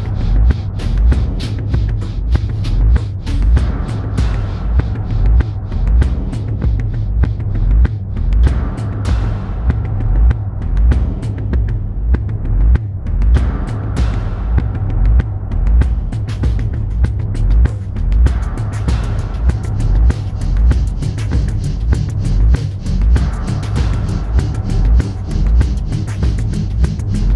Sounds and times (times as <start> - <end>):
Soundtrack music: 13.4 - 27.3.